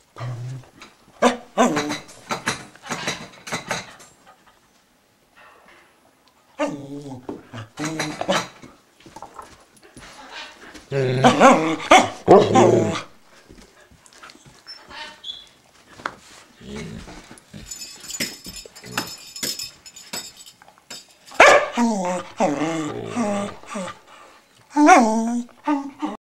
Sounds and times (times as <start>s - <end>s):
Jingle bell: 17.5s - 21.4s.